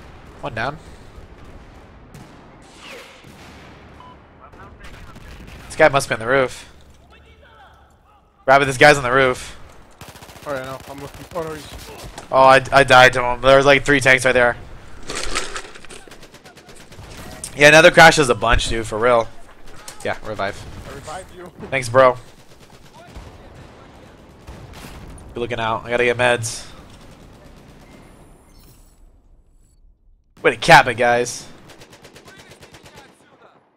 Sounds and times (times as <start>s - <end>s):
Speech: 4.4s - 9.6s, 16.5s - 22.2s, 30.4s - 31.6s, 32.2s - 33.6s.